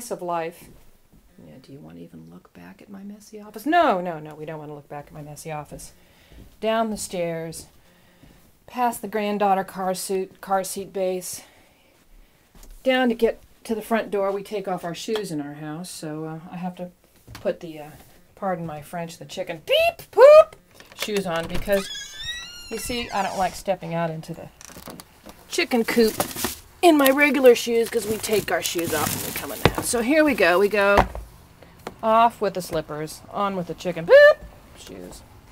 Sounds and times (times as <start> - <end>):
Speech: 0.0 - 0.7, 1.4 - 5.9, 6.6 - 7.7, 8.7 - 11.5, 12.8 - 21.9, 22.7 - 24.5, 25.5 - 26.2, 26.8 - 31.0, 32.0 - 35.3.